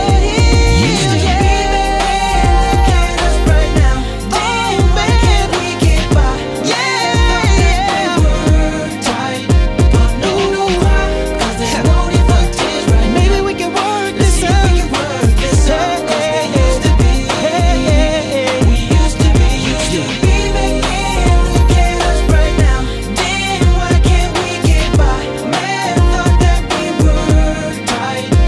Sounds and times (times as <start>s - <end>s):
Music: 0.0s - 28.4s.